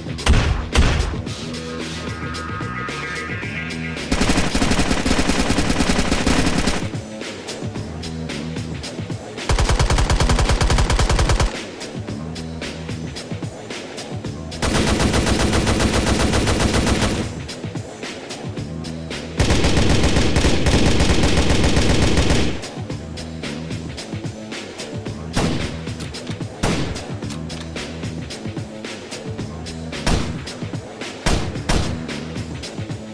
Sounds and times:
Music: 0:00.0 - 0:33.1.

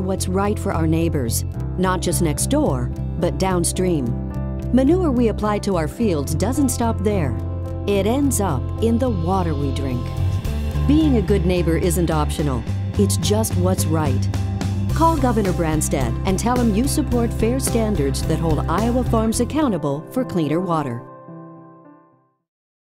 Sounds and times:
Speech: 0:00.0 - 0:10.2, 0:10.9 - 0:14.3, 0:15.0 - 0:21.1
Music: 0:00.0 - 0:22.5.

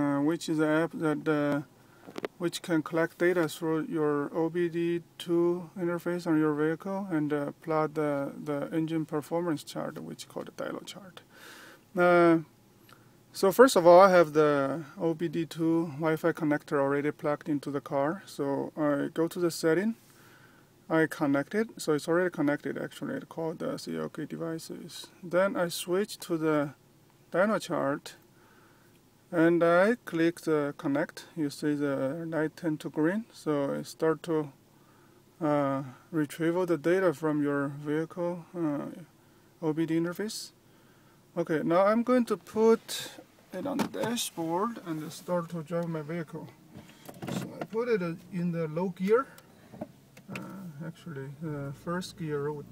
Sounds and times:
Speech: 0:00.0 - 0:01.7, 0:02.4 - 0:11.2, 0:12.0 - 0:12.5, 0:13.4 - 0:20.0, 0:20.9 - 0:28.2, 0:29.3 - 0:34.6, 0:35.4 - 0:40.6, 0:41.4 - 0:46.6, 0:47.3 - 0:49.4, 0:50.3 - 0:52.7.

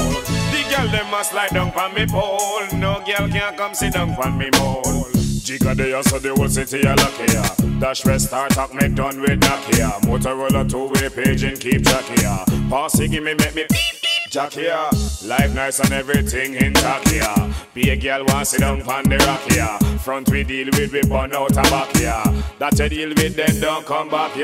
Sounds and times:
Music: 0:00.0 - 0:14.3, 0:14.9 - 0:24.4.

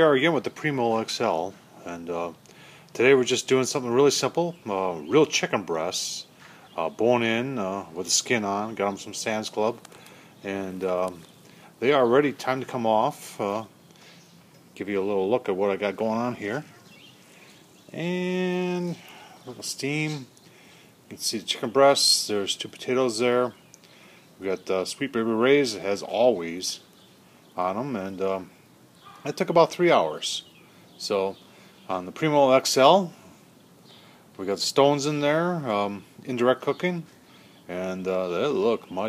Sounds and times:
Speech: 0:00.0 - 0:02.4, 0:03.0 - 0:09.8, 0:10.4 - 0:13.8, 0:14.8 - 0:16.7, 0:17.9 - 0:20.3, 0:21.1 - 0:23.6, 0:24.4 - 0:26.9, 0:27.6 - 0:28.6, 0:29.2 - 0:33.3, 0:34.4 - 0:39.0.

